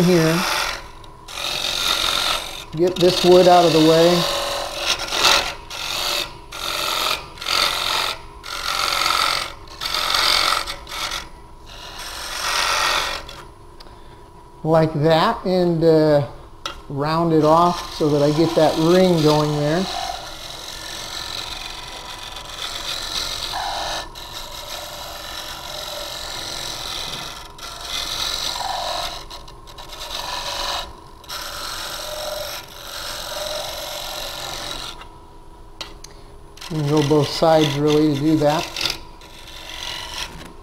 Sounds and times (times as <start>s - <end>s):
Speech: 0.0s - 0.5s, 2.8s - 4.3s, 14.7s - 16.3s, 16.9s - 20.0s, 36.7s - 38.7s.